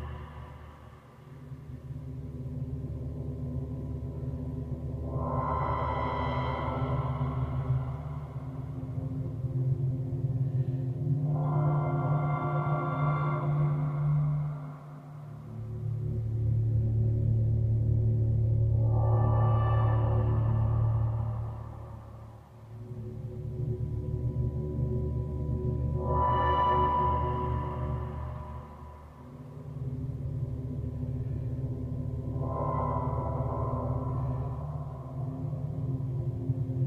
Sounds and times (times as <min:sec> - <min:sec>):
Music: 0:00.0 - 0:36.8.